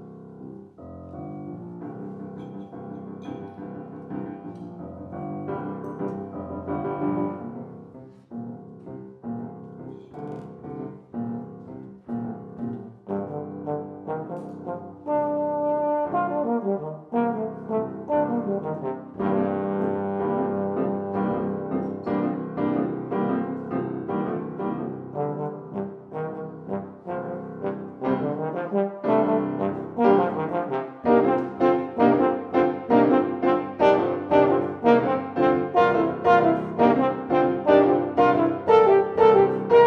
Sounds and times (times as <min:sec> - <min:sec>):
Piano: 0:00.0 - 0:39.8
Trombone: 0:12.8 - 0:39.8
Trumpet: 0:13.0 - 0:39.8.